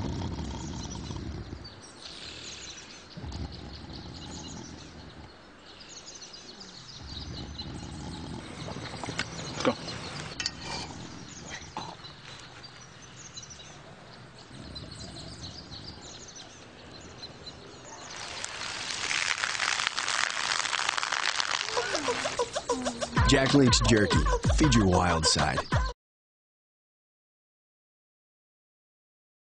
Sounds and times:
Gurgling: 0:18.0 - 0:23.1
Music: 0:22.4 - 0:26.0
Speech: 0:22.8 - 0:25.7.

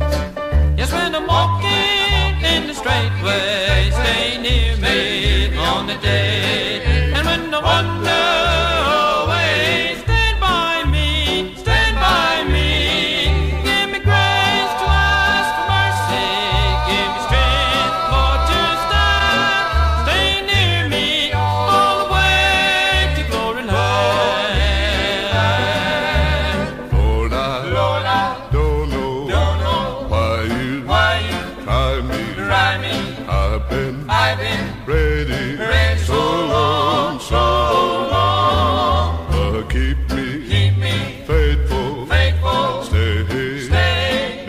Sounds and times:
Music: 0:00.0 - 0:44.4.

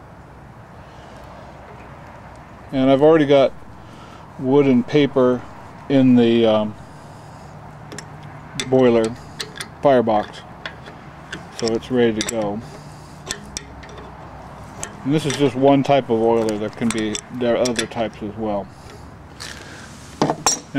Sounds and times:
Speech: 0:02.7 - 0:03.5, 0:04.4 - 0:06.8, 0:09.8 - 0:10.4, 0:11.6 - 0:12.6, 0:15.1 - 0:18.7.

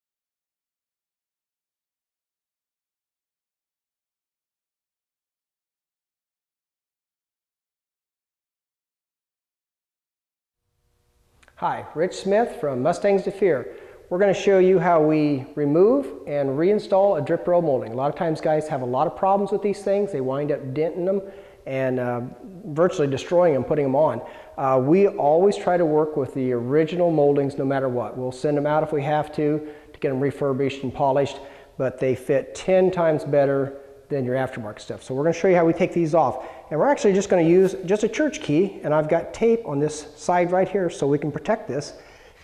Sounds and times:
Speech: 0:11.5 - 0:42.0.

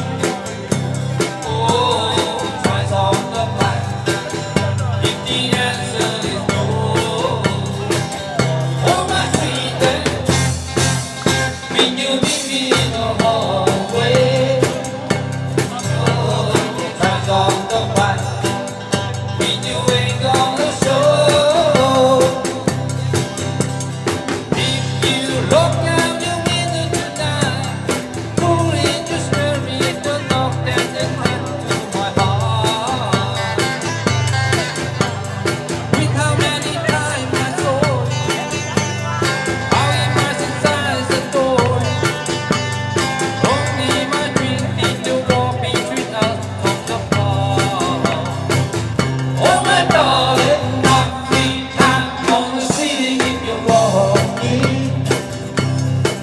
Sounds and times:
Singing: 0:00.0 - 0:10.6, 0:11.6 - 0:22.8, 0:24.5 - 0:33.9, 0:35.9 - 0:42.3, 0:43.2 - 0:55.4
Speech: 0:00.0 - 0:22.9, 0:24.6 - 0:42.2, 0:43.3 - 0:48.7
Music: 0:00.0 - 0:56.2.

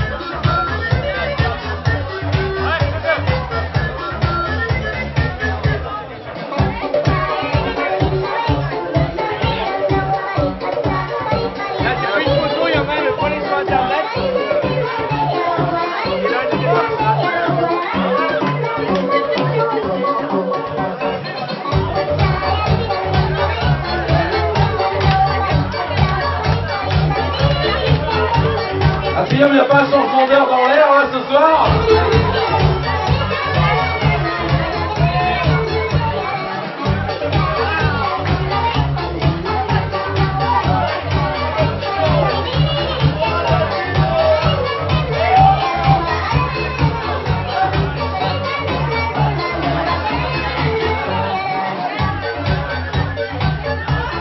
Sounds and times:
Speech: 0:00.0 - 0:04.2, 0:11.5 - 0:21.7, 0:25.0 - 0:38.5
Music: 0:00.0 - 0:54.2.

